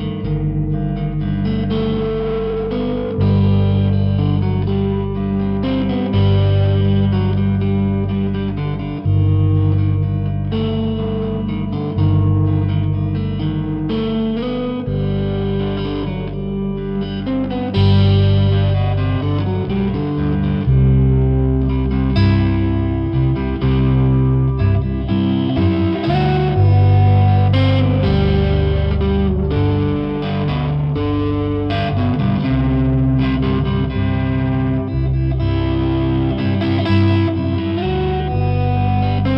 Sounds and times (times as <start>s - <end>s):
Distortion: 0.0s - 39.3s
Electric guitar: 0.0s - 39.3s.